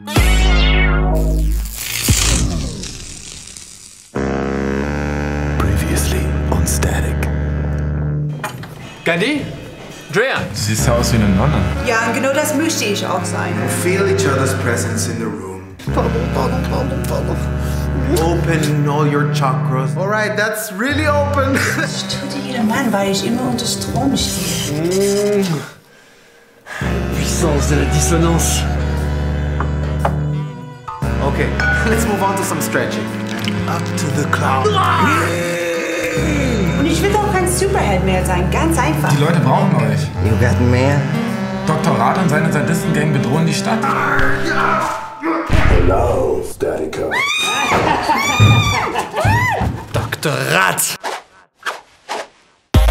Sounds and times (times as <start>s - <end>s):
Music: 0.0s - 3.4s, 4.1s - 45.7s.